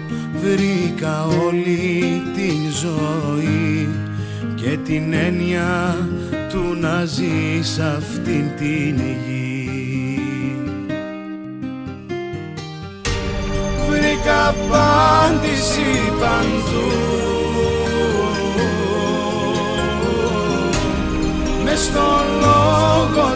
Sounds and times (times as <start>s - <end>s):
Gospel music: 0.0s - 11.0s, 13.0s - 23.3s
Soul music: 4.6s - 23.3s.